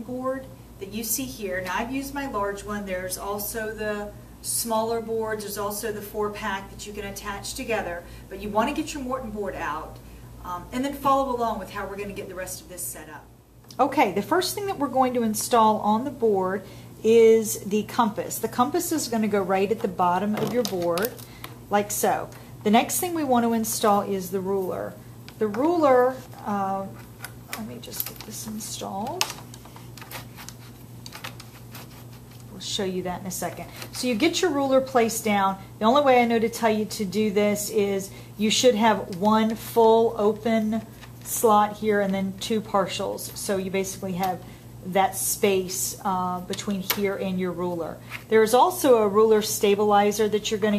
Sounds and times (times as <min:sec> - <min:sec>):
Speech: 0:00.0 - 0:29.4, 0:32.5 - 0:50.7.